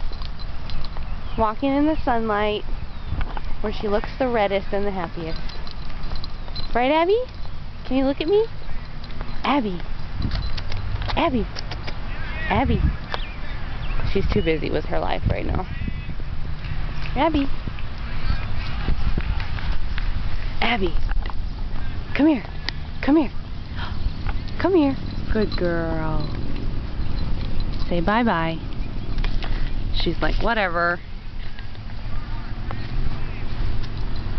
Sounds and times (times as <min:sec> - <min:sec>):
Speech: 0:09.4 - 0:09.8, 0:11.2 - 0:11.5, 0:12.1 - 0:13.0, 0:17.2 - 0:17.5, 0:21.8 - 0:23.4.